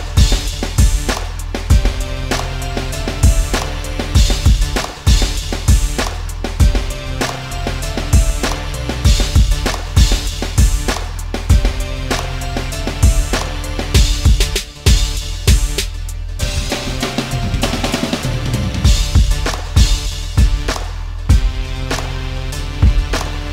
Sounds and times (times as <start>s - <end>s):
Music: 0.0s - 23.5s.